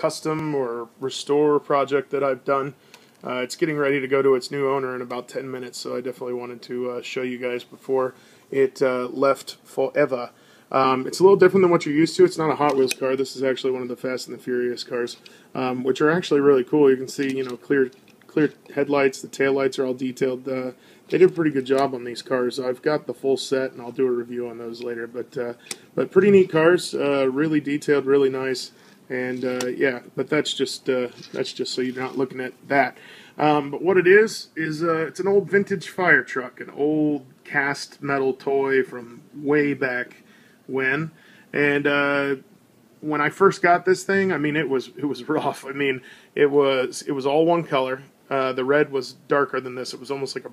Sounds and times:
Speech: 0.0 - 50.5.

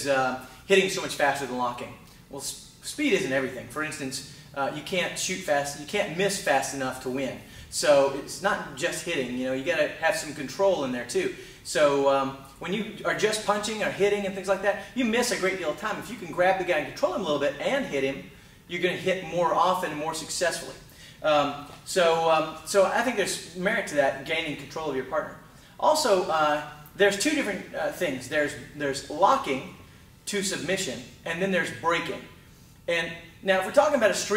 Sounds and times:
Speech: 0.0 - 34.3.

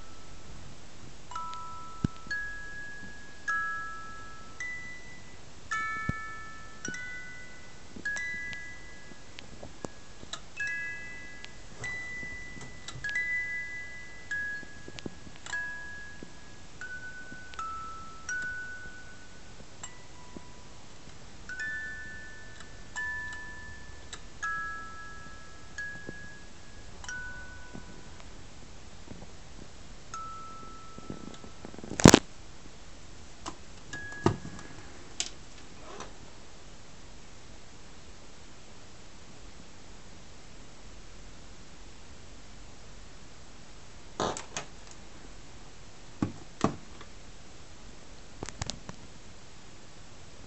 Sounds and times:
Music: 0.0 - 28.5, 30.1 - 32.1, 33.9 - 35.2
Inside, small room: 0.0 - 50.4.

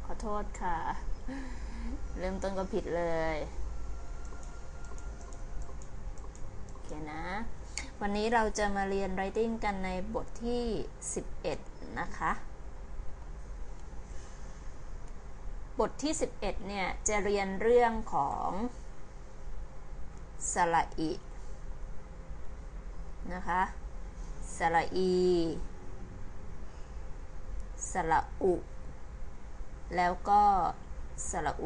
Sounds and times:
Speech: 0.0 - 1.0, 2.2 - 3.5, 6.8 - 12.5, 15.8 - 18.8, 20.4 - 21.2, 23.2 - 23.8, 24.5 - 25.7, 27.8 - 28.6, 29.9 - 31.6.

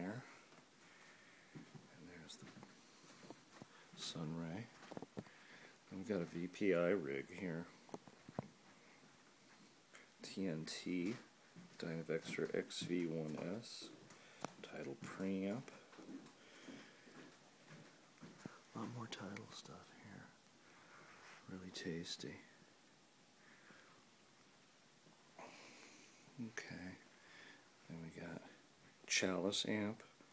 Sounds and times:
Speech: 4.0 - 4.8, 5.9 - 7.8, 10.2 - 14.0, 14.6 - 15.8, 18.8 - 20.4, 21.5 - 22.6, 26.4 - 27.0, 27.9 - 30.1.

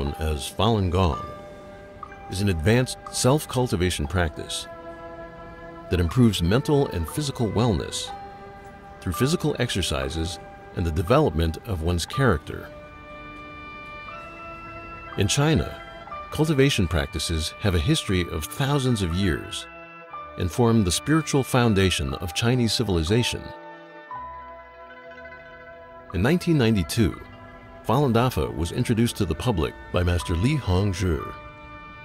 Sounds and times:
Speech: 0.0 - 1.4, 2.3 - 4.7, 5.9 - 8.1, 9.0 - 12.7, 15.2 - 19.7, 20.4 - 23.6, 26.2 - 27.3, 27.9 - 31.4
Music: 0.0 - 32.0.

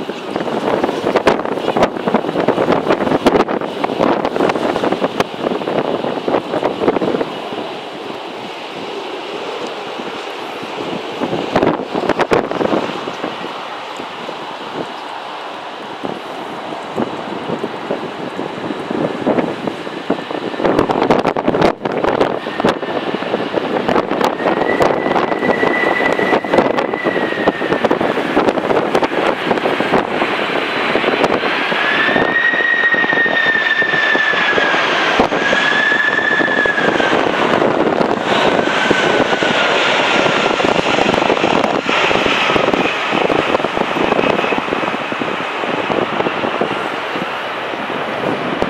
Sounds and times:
Aircraft engine: 0.0 - 48.7
Outside, urban or manmade: 0.0 - 48.7.

